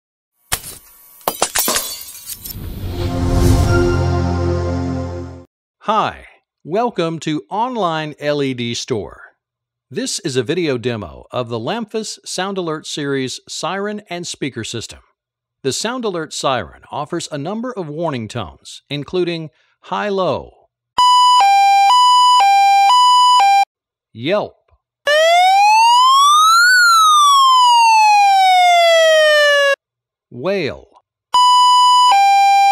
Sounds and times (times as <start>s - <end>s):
Breaking: 0.5s - 2.7s
Music: 2.6s - 5.5s
Speech: 5.8s - 20.6s, 24.2s - 24.6s, 30.3s - 31.0s.